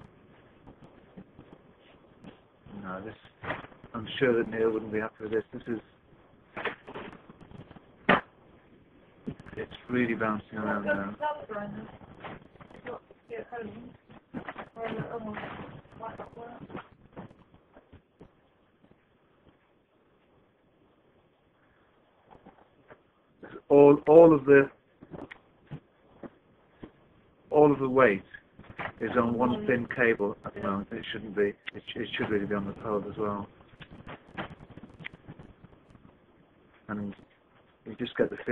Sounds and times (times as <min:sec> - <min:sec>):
Speech: 0:02.7 - 0:03.2, 0:03.9 - 0:05.8, 0:09.6 - 0:11.9, 0:14.8 - 0:16.6, 0:23.4 - 0:24.8, 0:27.5 - 0:28.3, 0:29.0 - 0:33.5, 0:36.9 - 0:37.2, 0:37.9 - 0:38.5.